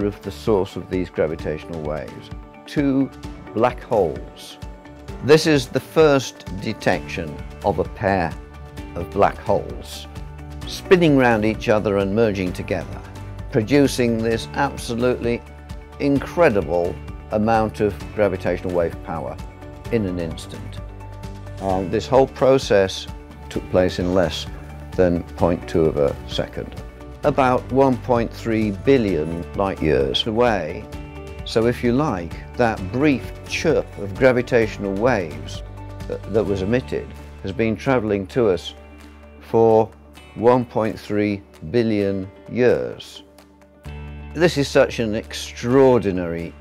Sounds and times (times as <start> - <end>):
Speech: 0.0 - 4.6, 5.2 - 10.1, 10.7 - 15.4, 16.0 - 20.8, 21.6 - 30.9, 31.5 - 38.8, 39.4 - 43.2, 44.4 - 46.6
Music: 0.0 - 46.6.